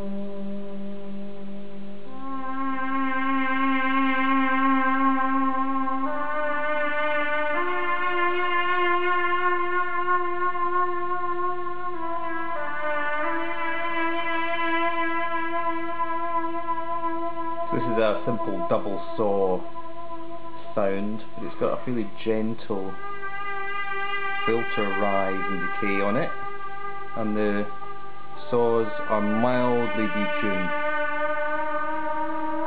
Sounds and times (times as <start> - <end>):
Music: 0.0 - 32.6.